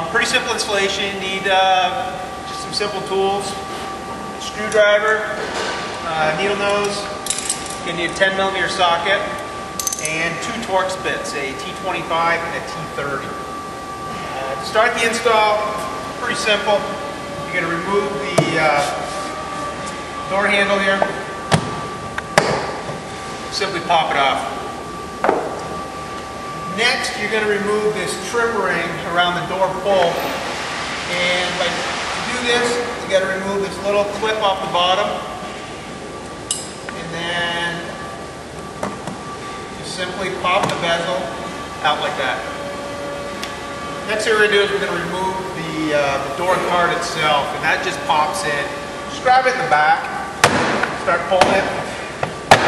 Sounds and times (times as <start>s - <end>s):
Speech: 0.0s - 3.6s, 4.4s - 5.4s, 6.0s - 7.2s, 7.8s - 9.4s, 10.1s - 13.4s, 14.2s - 16.9s, 17.5s - 19.1s, 20.3s - 21.2s, 23.5s - 24.6s, 26.7s - 30.4s, 31.1s - 35.3s, 37.0s - 38.0s, 39.8s - 42.5s, 44.1s - 50.2s, 51.0s - 51.9s.